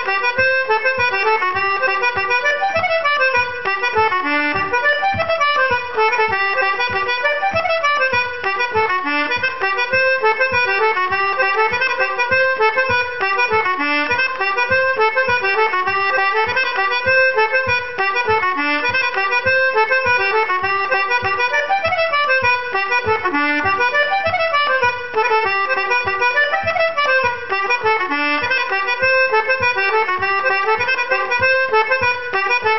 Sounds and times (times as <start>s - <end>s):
Musical instrument: 0.0s - 32.7s.